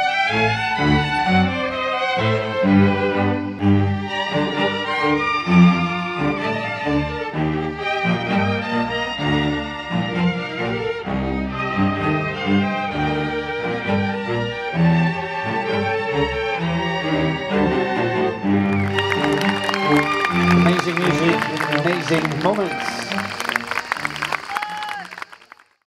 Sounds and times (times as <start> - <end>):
Classical music: 0.0 - 25.4.